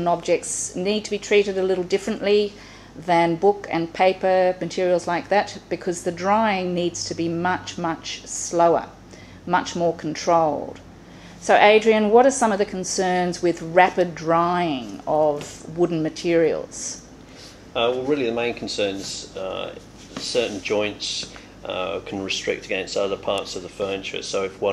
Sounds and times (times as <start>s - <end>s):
Speech: 0.0s - 8.9s, 9.5s - 10.8s, 11.5s - 17.0s, 17.8s - 24.7s.